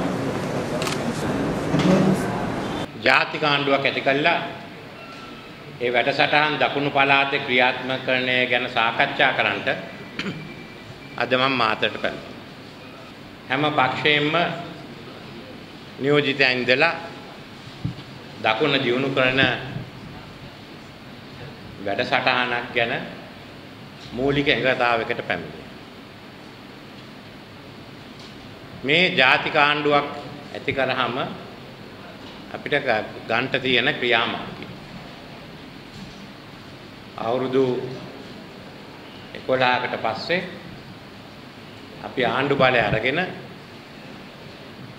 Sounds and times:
Narration, monologue: 2.9s - 5.0s, 5.7s - 10.5s, 11.1s - 38.6s, 39.2s - 43.7s
Male speech, man speaking: 3.0s - 4.7s, 5.8s - 9.9s, 11.2s - 12.3s, 13.5s - 14.8s, 16.0s - 17.1s, 18.4s - 19.8s, 21.8s - 23.2s, 24.1s - 25.6s, 28.8s - 31.4s, 32.5s - 34.6s, 37.2s - 38.1s, 39.4s - 40.7s, 42.0s - 43.5s.

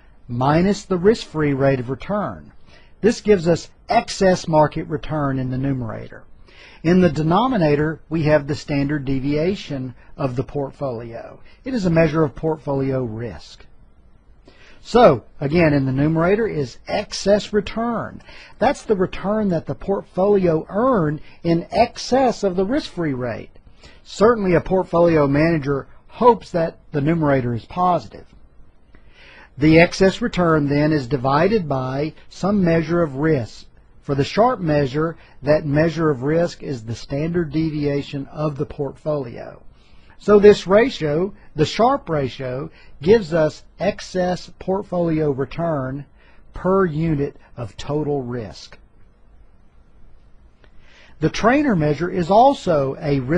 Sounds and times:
Speech: 0.3s - 13.7s, 14.8s - 28.3s, 29.6s - 48.8s, 51.2s - 53.3s.

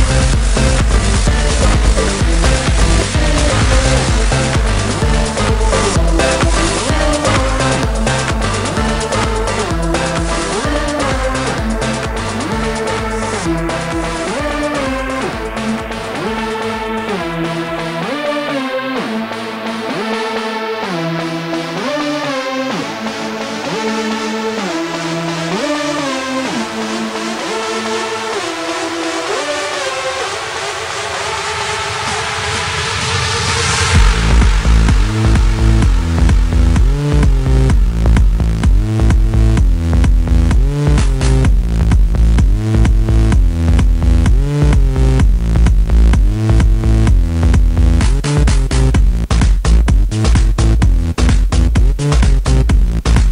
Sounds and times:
House music: 0.0s - 53.3s
Trance music: 0.0s - 53.3s.

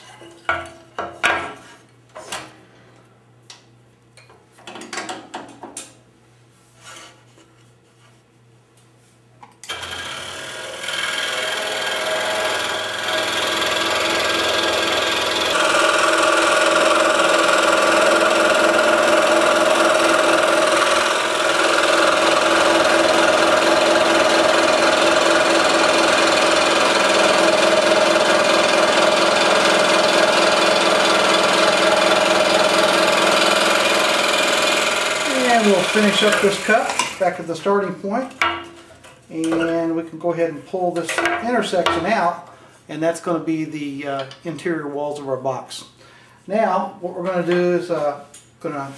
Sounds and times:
Sawing: 9.7s - 37.4s
Wood: 27.0s - 37.2s.

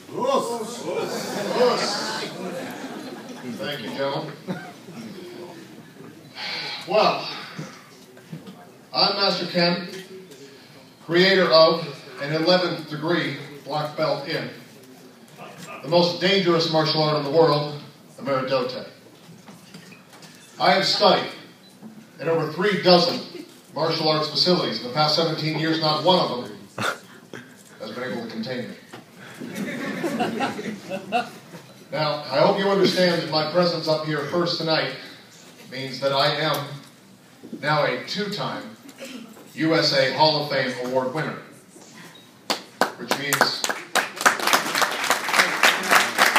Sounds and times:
Male speech, man speaking: 0.1s - 2.4s, 3.4s - 4.4s, 6.9s - 7.4s, 8.9s - 14.8s, 15.4s - 19.0s, 20.6s - 21.5s, 22.2s - 26.7s, 27.8s - 28.8s, 31.9s - 36.8s, 37.6s - 38.8s, 39.6s - 41.5s, 43.0s - 43.7s.

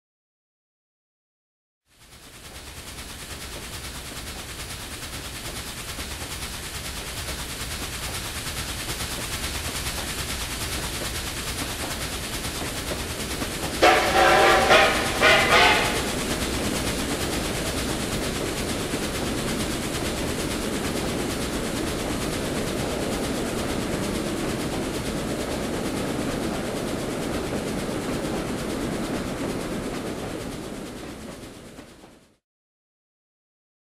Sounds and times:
Railroad car, train wagon: 1.9s - 32.4s.

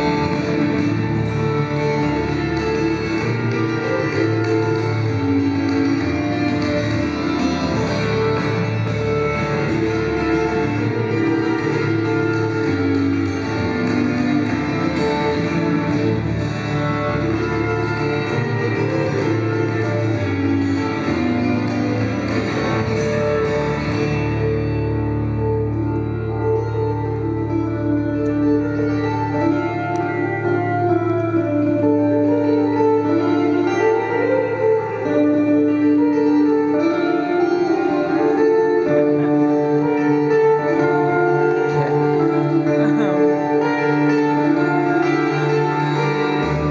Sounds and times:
Guitar: 0.0s - 46.7s.

